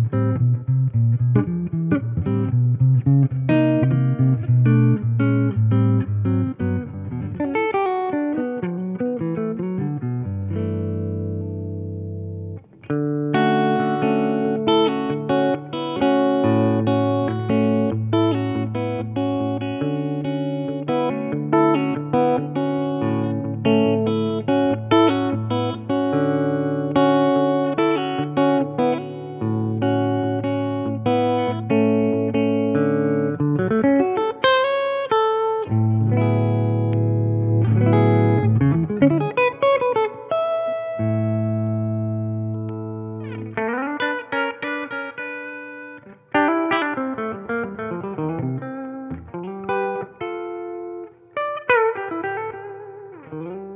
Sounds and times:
Electric guitar: 0.0 - 53.7
Inside, small room: 0.0 - 53.7.

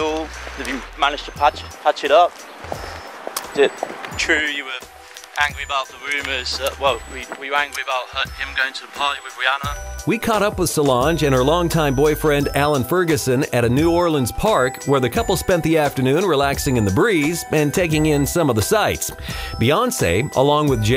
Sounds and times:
Speech: 0.0 - 2.3, 3.5 - 20.9
Music: 0.0 - 20.9.

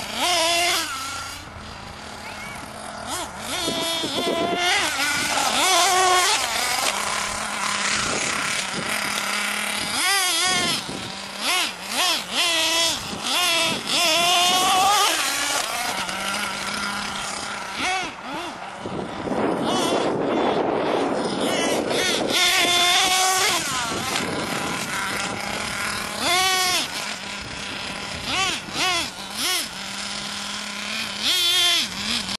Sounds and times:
Car: 0.0 - 32.3.

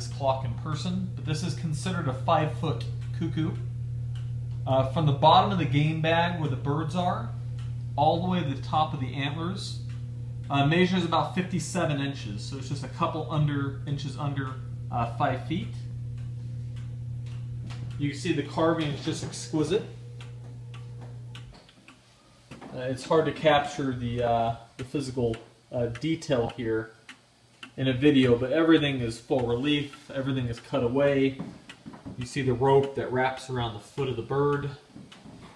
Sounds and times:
Speech: 0.0 - 3.6, 4.7 - 7.4, 8.0 - 9.8, 10.5 - 15.9, 18.0 - 20.0, 22.7 - 27.0, 27.8 - 31.4, 32.2 - 34.8
Tick-tock: 0.0 - 22.0, 23.0 - 30.9, 31.7 - 35.2
Tick: 7.6 - 7.8, 16.2 - 17.9, 20.2 - 22.0, 26.0 - 28.3.

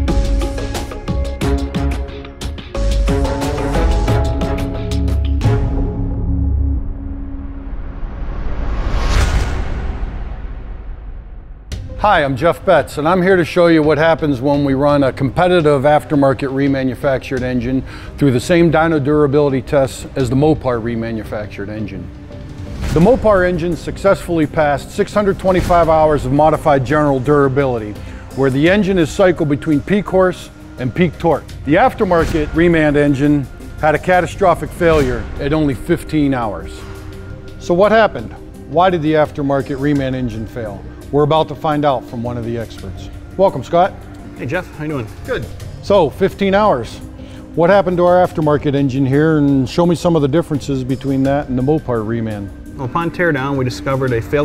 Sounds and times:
Music: 0.0 - 54.4
Speech: 12.0 - 22.1, 23.0 - 36.8, 37.6 - 47.0, 47.6 - 54.4.

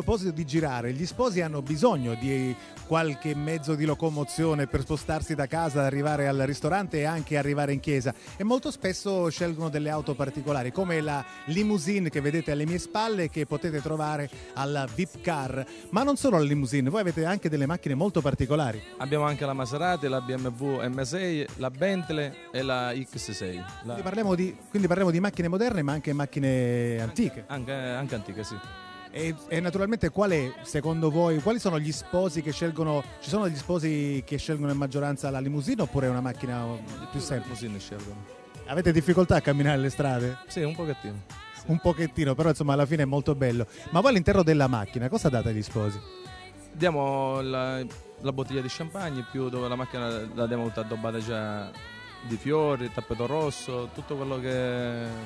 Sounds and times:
Speech: 0.0 - 28.6, 29.2 - 46.0, 46.8 - 55.2
Music: 0.0 - 55.2.

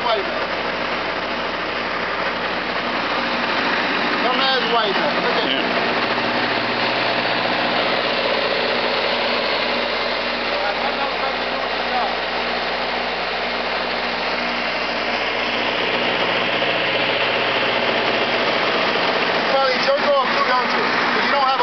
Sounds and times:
Speech: 0.0 - 0.4, 4.2 - 5.7, 10.5 - 12.2, 19.5 - 21.6
Vehicle: 0.0 - 21.6.

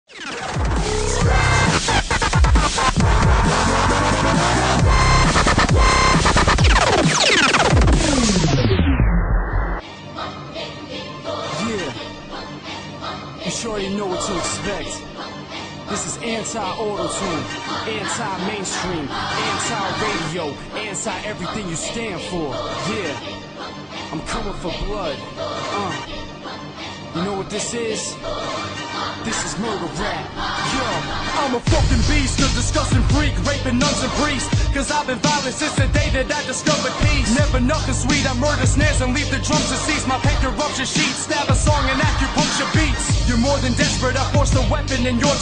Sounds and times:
Music: 0.0 - 45.4.

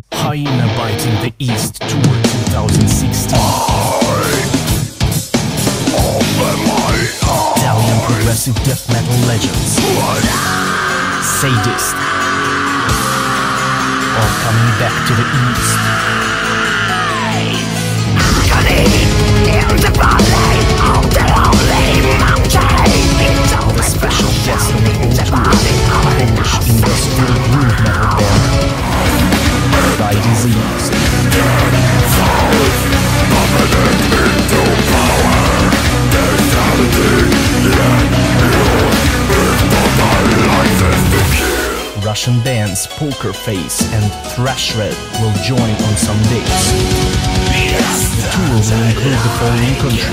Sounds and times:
Speech: 0.0 - 4.8, 5.9 - 16.2, 18.2 - 46.8, 47.5 - 50.1
Music: 0.0 - 50.1.

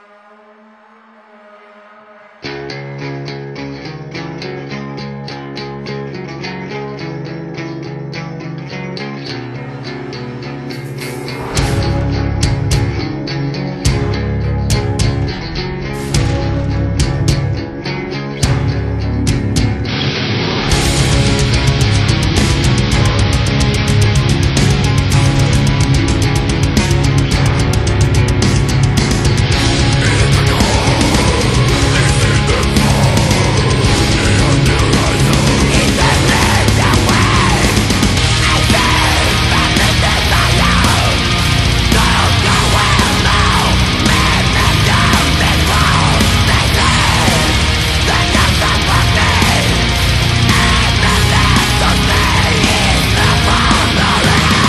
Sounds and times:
Music: 0.0 - 54.6.

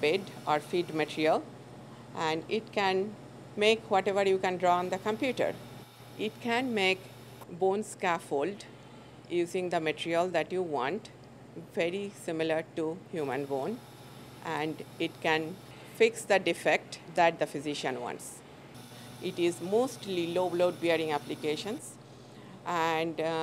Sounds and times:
Speech: 2.2 - 5.6, 6.2 - 7.0, 14.5 - 18.4, 19.2 - 22.0, 22.7 - 23.4.

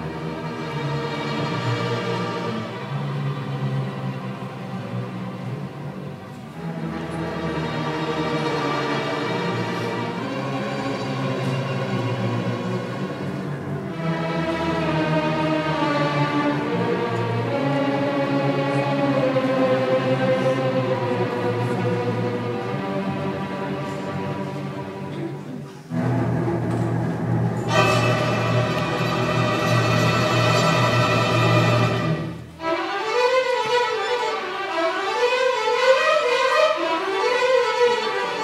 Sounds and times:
Music: 0.0 - 38.4.

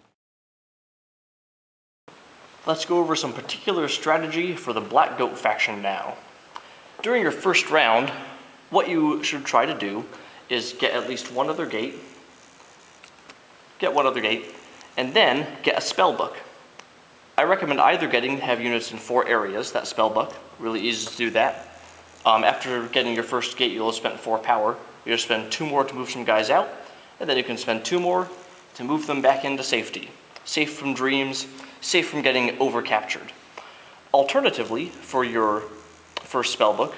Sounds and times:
Speech: 2.7 - 6.3, 7.0 - 12.2, 13.8 - 16.6, 17.4 - 33.4, 34.1 - 36.9.

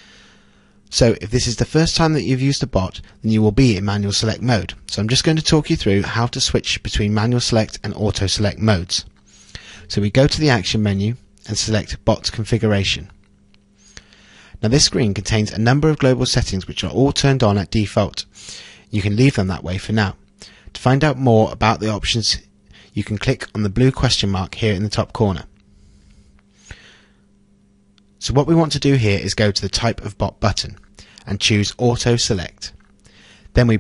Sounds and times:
Speech: 0.9 - 9.1, 9.9 - 13.2, 14.6 - 18.3, 18.9 - 20.2, 20.8 - 25.5, 28.2 - 32.8, 33.6 - 33.8.

